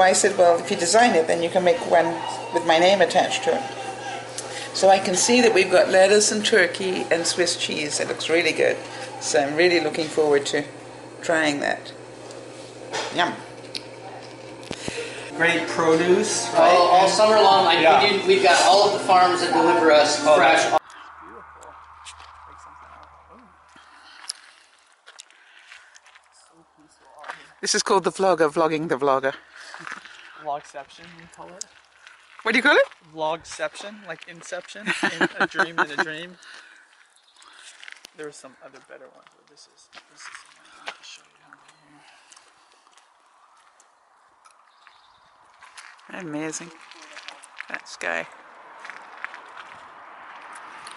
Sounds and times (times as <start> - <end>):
Outside, rural or natural: 20.8 - 50.9.